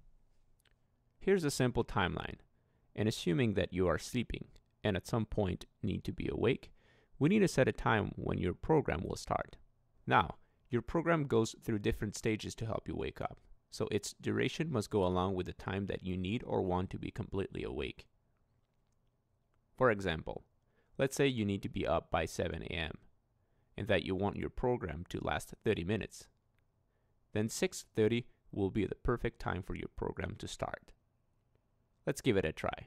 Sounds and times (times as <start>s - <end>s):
Speech: 1.2s - 18.1s, 19.8s - 23.1s, 23.8s - 26.4s, 27.3s - 31.0s, 32.0s - 32.8s.